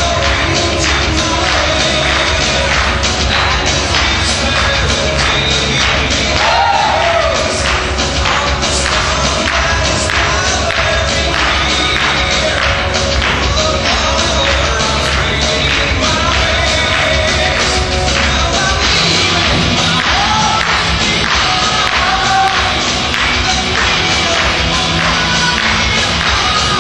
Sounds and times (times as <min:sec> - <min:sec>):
Rock and roll: 0:00.0 - 0:26.8.